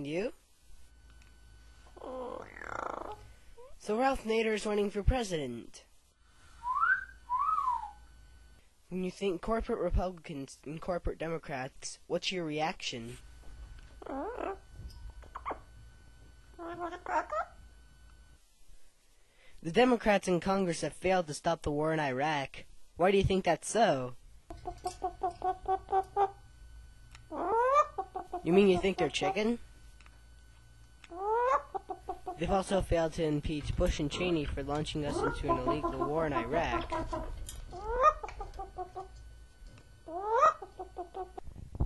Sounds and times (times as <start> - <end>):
Whistling: 6.6 - 8.0.